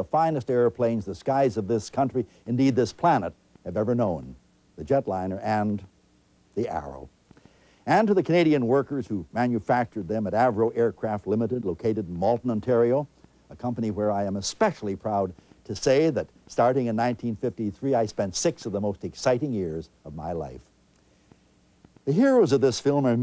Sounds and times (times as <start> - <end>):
Speech: 0.0 - 5.9, 6.6 - 7.1, 7.9 - 20.7, 22.0 - 23.2.